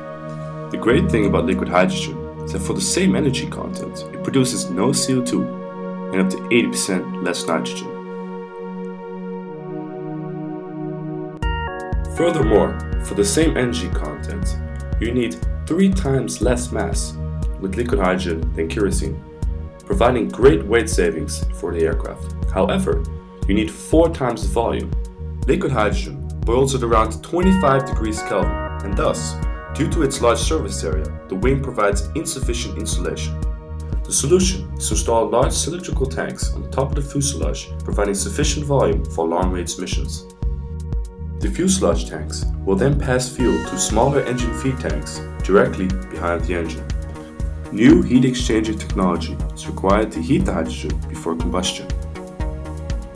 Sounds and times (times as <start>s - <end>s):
Music: 0.0s - 53.1s
Speech: 0.7s - 5.5s, 6.1s - 8.0s, 12.2s - 19.2s, 19.9s - 33.4s, 34.1s - 40.3s, 41.4s - 47.0s, 47.7s - 52.0s.